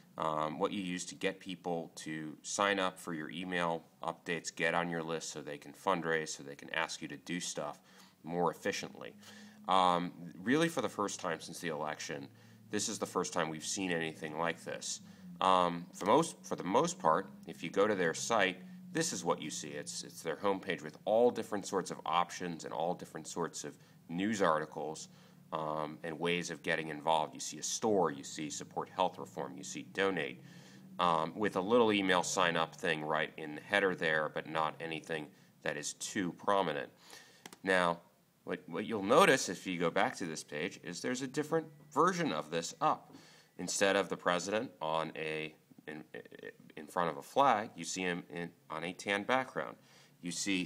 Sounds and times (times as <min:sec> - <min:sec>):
Speech: 0:00.2 - 0:30.4, 0:31.0 - 0:37.0, 0:37.6 - 0:50.6.